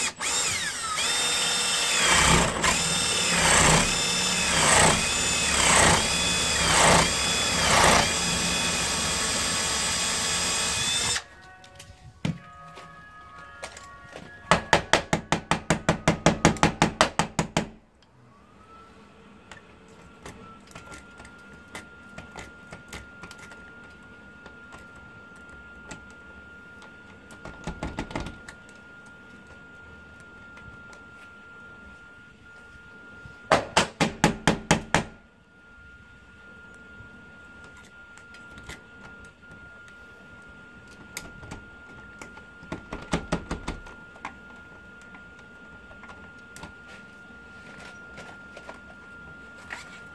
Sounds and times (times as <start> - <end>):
Music: 11.6 - 14.9.